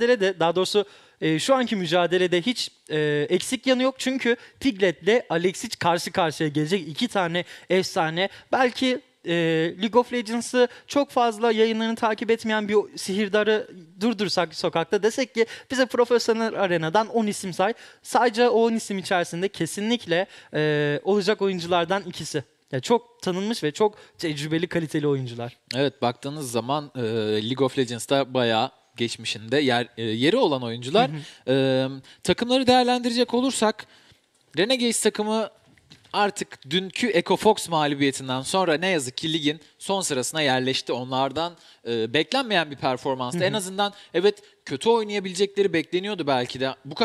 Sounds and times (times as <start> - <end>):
Speech: 0.0 - 33.9, 34.6 - 47.0.